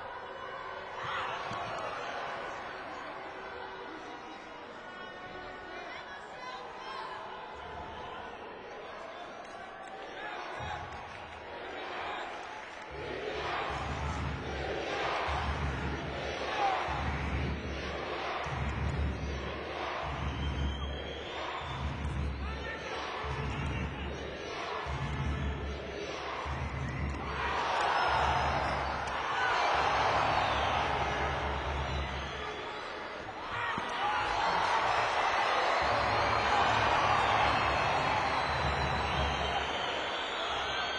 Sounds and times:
Speech: 3.0s - 12.5s, 22.4s - 24.8s.

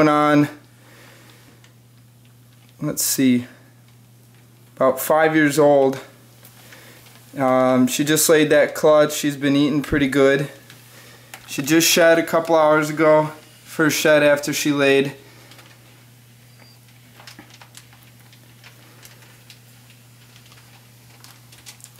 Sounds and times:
Speech: 0.0s - 0.6s, 2.8s - 3.6s, 4.8s - 6.1s, 7.4s - 10.6s, 11.5s - 15.2s
Inside, small room: 0.0s - 21.9s.

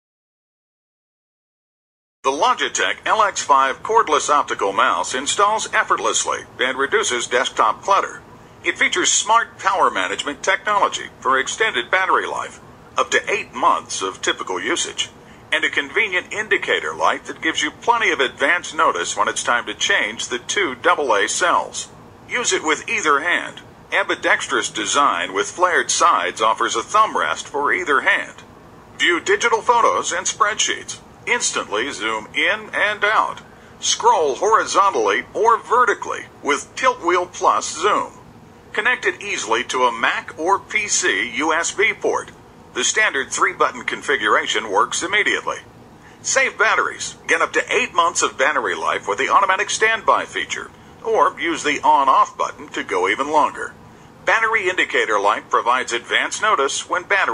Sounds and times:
Speech: 2.3s - 57.3s.

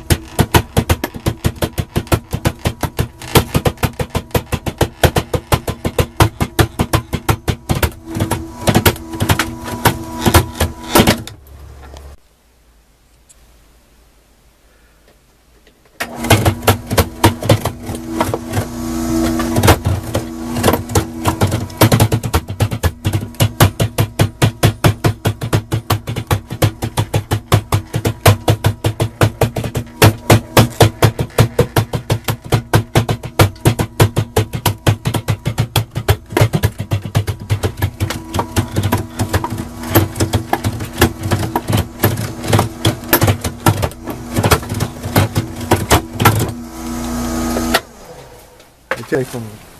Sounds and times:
Wood: 0.0s - 12.2s, 15.1s - 49.6s.

